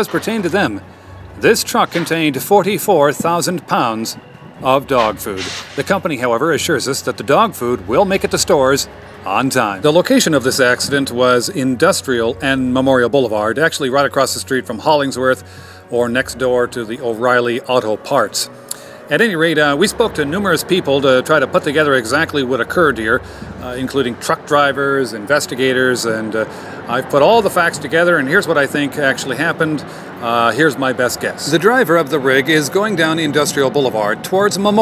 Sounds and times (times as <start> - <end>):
Speech: 0.0 - 0.8, 1.4 - 18.5, 19.1 - 34.8
Music: 0.0 - 34.8.